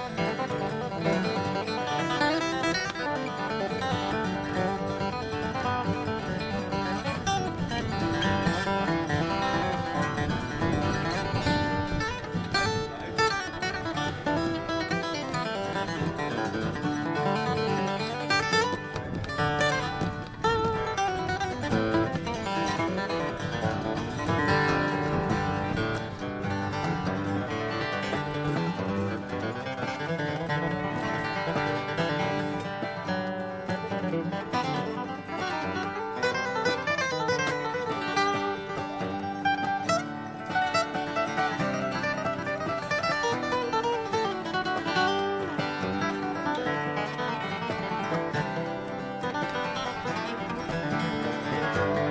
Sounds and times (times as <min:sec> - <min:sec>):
Acoustic guitar: 0:00.0 - 0:52.1.